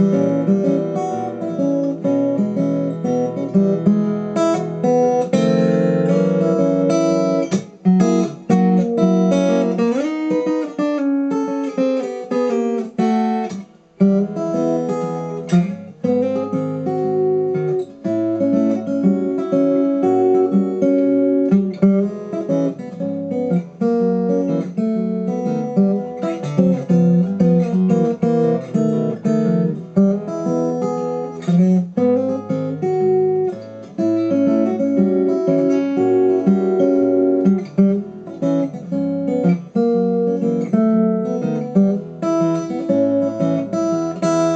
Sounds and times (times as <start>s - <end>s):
Acoustic guitar: 0.0s - 44.5s.